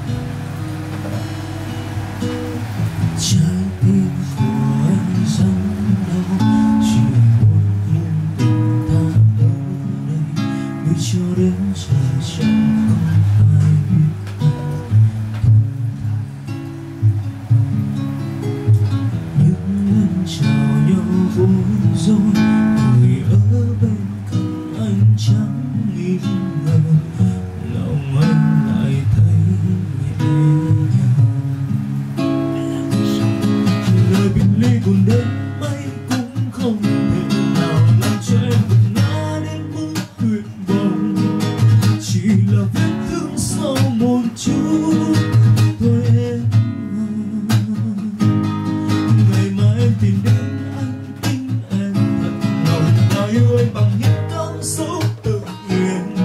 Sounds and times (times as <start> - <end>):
Acoustic guitar: 0.0 - 56.2.